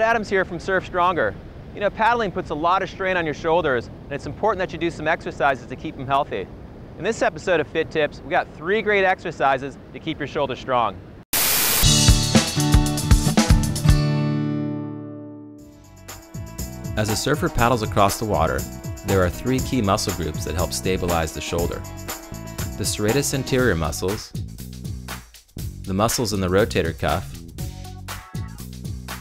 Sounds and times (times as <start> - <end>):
Speech: 0.0 - 11.0, 17.0 - 21.8, 22.8 - 24.4, 25.9 - 27.4
Music: 11.8 - 29.2.